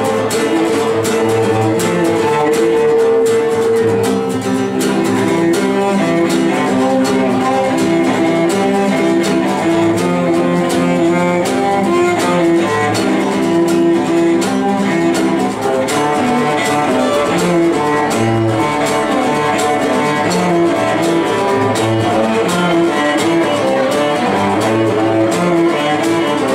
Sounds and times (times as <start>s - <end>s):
Violin, fiddle: 0.0s - 26.5s.